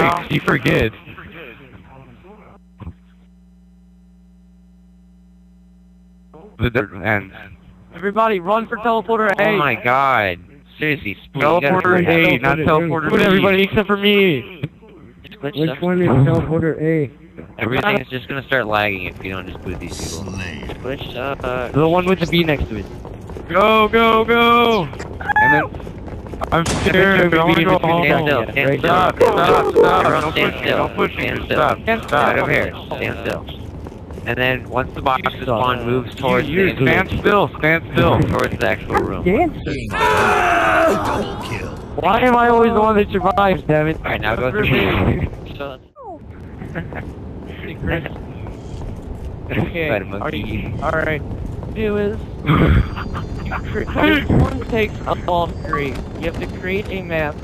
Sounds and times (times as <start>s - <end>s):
Speech: 0.0s - 2.6s, 6.4s - 22.9s, 23.5s - 25.7s, 26.4s - 33.6s, 34.3s - 46.2s, 47.5s - 48.3s, 49.5s - 51.2s, 51.8s - 52.2s, 53.6s - 57.4s.